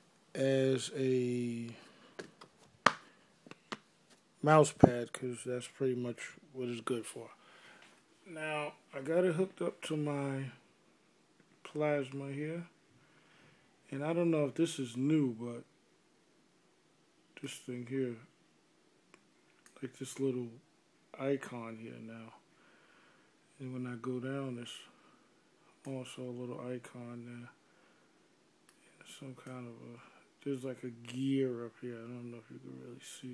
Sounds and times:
Speech: 0.3 - 1.8, 4.4 - 7.4, 8.2 - 10.6, 11.6 - 12.8, 13.9 - 15.7, 17.4 - 18.4, 19.8 - 22.4, 23.5 - 25.0, 25.8 - 27.6, 28.8 - 33.3.

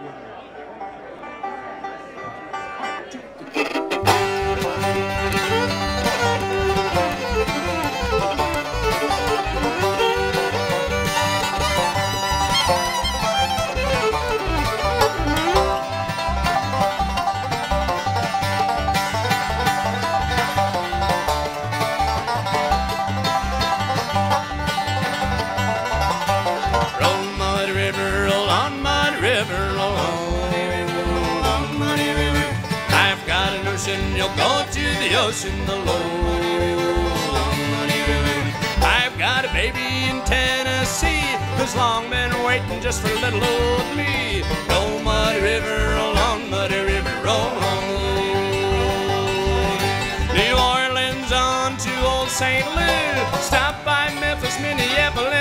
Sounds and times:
Music: 1.3 - 55.4.

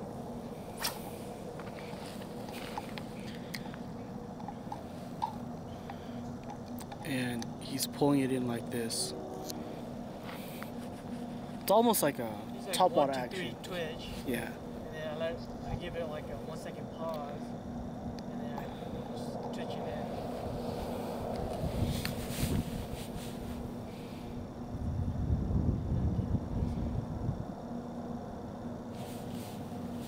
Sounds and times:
Outside, rural or natural: 0.0 - 30.0
Speech: 18.3 - 20.1.

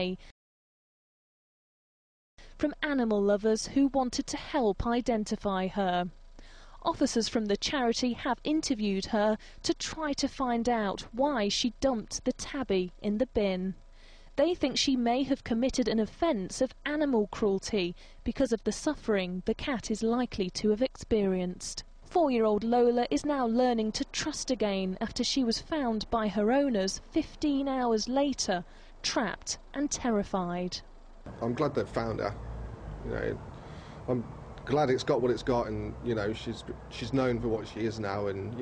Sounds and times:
Speech: 0.0 - 0.2, 2.6 - 6.1, 6.8 - 13.8, 14.4 - 30.8, 31.4 - 32.4, 33.1 - 33.4, 34.1 - 38.6.

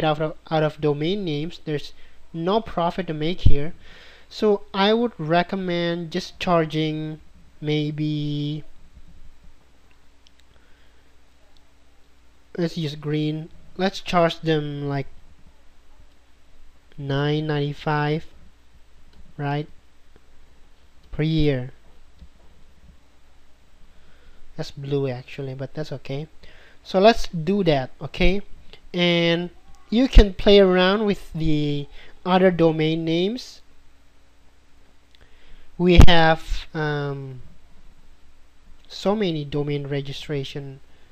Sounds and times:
Speech: 0.0 - 8.7, 12.6 - 15.1, 17.0 - 18.4, 19.4 - 19.7, 21.1 - 21.8, 24.6 - 33.7, 35.8 - 37.5, 38.9 - 40.9
Inside, small room: 0.0 - 41.1.

